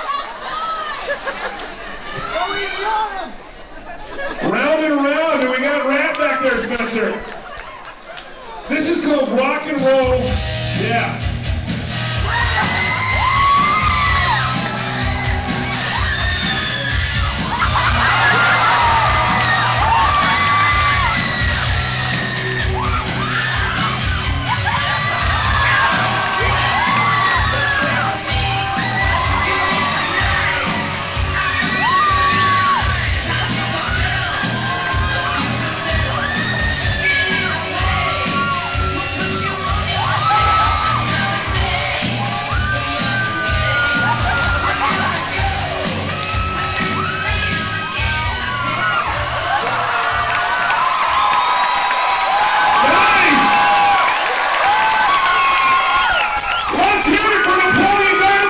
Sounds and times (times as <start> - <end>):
Bass guitar: 10.0 - 50.5.